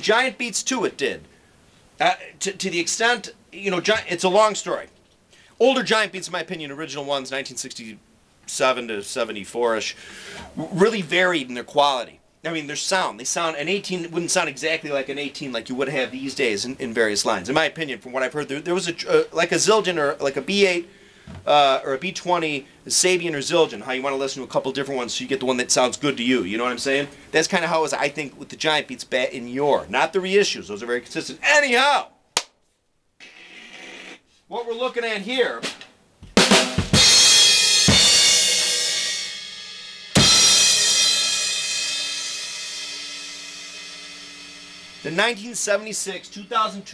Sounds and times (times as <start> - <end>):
Drum kit: 35.6 - 46.9.